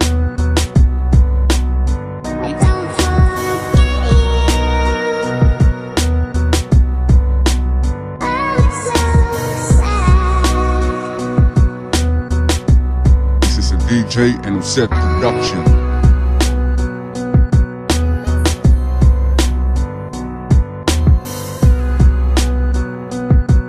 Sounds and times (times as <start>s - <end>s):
Music: 0.0s - 23.6s
Speech: 13.4s - 15.8s.